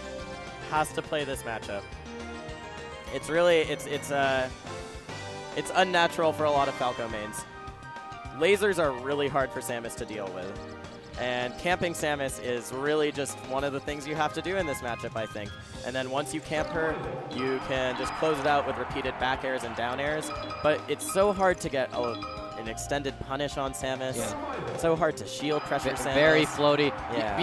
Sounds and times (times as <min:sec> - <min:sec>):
Music: 0:00.0 - 0:27.4
Speech: 0:00.7 - 0:01.8, 0:03.1 - 0:04.5, 0:05.6 - 0:07.4, 0:08.4 - 0:10.5, 0:11.2 - 0:27.4.